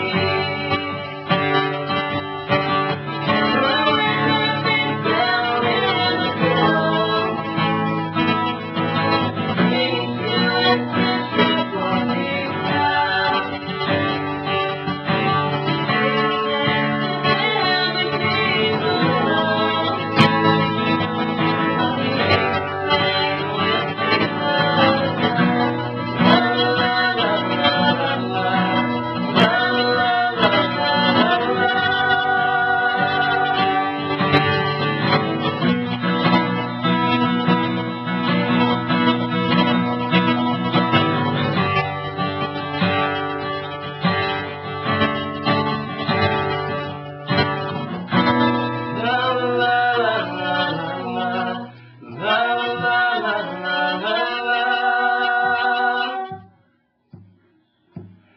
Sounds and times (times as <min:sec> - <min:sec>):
Singing: 0:00.0 - 0:01.5, 0:03.3 - 0:07.9, 0:08.8 - 0:14.0, 0:15.1 - 0:34.4, 0:48.9 - 0:56.6
Country: 0:00.0 - 0:56.5
Guitar: 0:00.0 - 0:58.3.